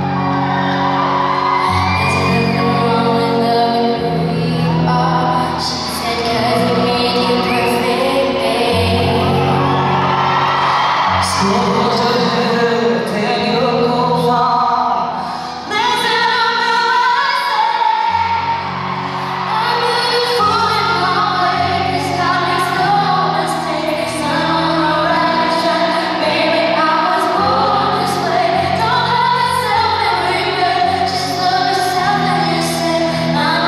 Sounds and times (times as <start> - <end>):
Inside, large room or hall: 0.0 - 33.6
Music: 0.0 - 33.6
Singing: 1.8 - 9.9.